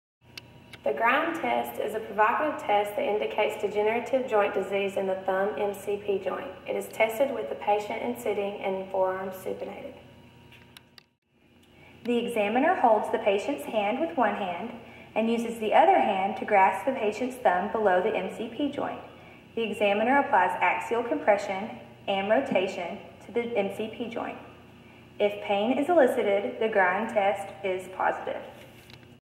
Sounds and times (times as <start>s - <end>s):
Speech: 0.8s - 10.0s, 12.1s - 24.5s, 25.2s - 28.6s.